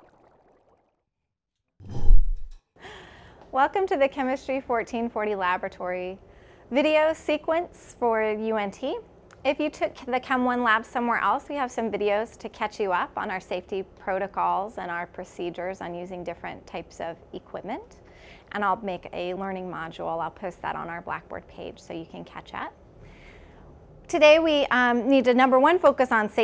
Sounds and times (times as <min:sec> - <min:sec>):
Speech: 0:03.5 - 0:22.8, 0:24.1 - 0:26.4.